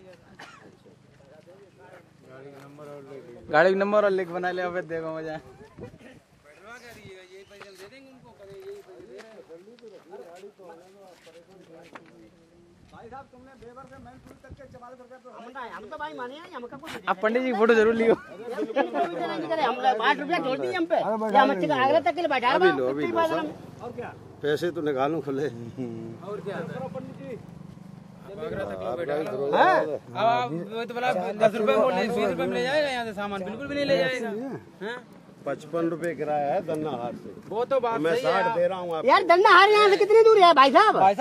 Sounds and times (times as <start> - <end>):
Speech: 1.2 - 25.6.